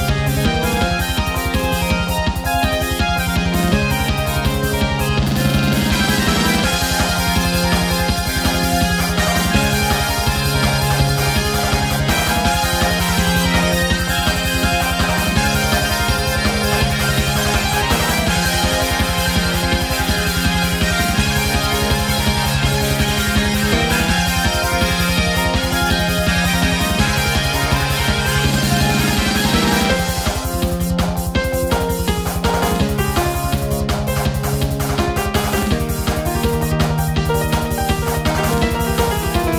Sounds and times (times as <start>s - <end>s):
Music: 0.0s - 39.5s.